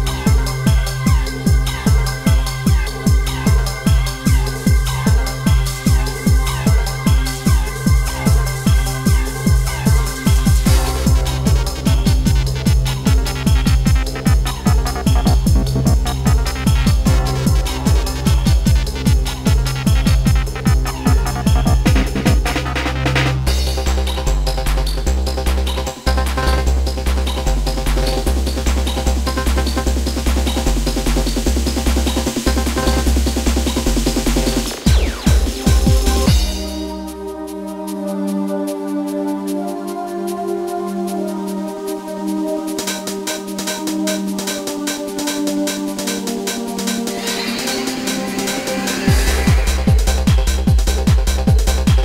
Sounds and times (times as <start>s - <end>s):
Trance music: 0.0s - 52.0s.